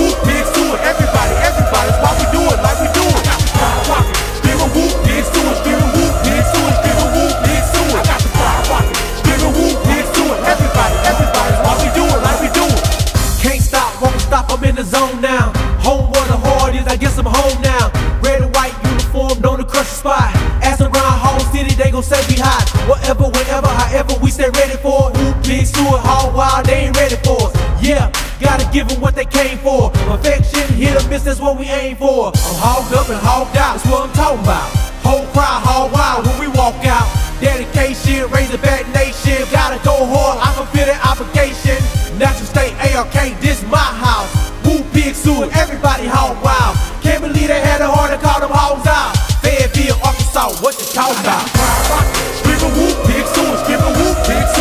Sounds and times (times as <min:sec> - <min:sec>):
Music: 0:00.0 - 0:54.6.